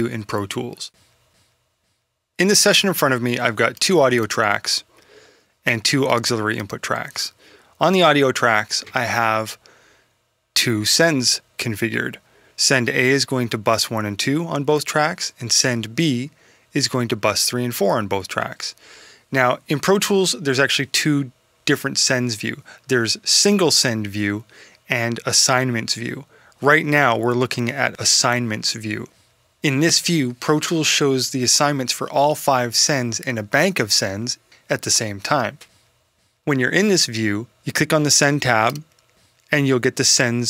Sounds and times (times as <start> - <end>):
Speech: 0.0 - 1.0, 2.4 - 4.9, 5.6 - 9.6, 10.6 - 35.7, 36.4 - 38.9, 39.5 - 40.4.